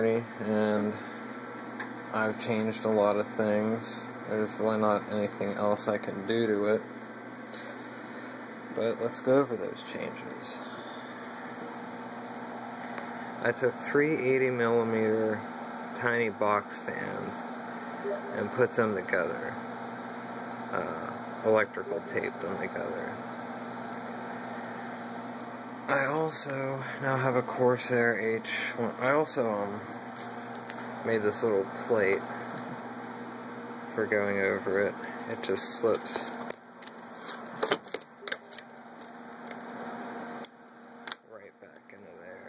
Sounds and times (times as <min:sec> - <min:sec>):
Speech: 0:00.0 - 0:01.0, 0:02.1 - 0:06.9, 0:08.8 - 0:10.8, 0:13.4 - 0:17.5, 0:18.1 - 0:19.6, 0:20.7 - 0:23.2, 0:25.9 - 0:29.9, 0:31.0 - 0:32.3, 0:33.9 - 0:36.4, 0:41.3 - 0:42.4.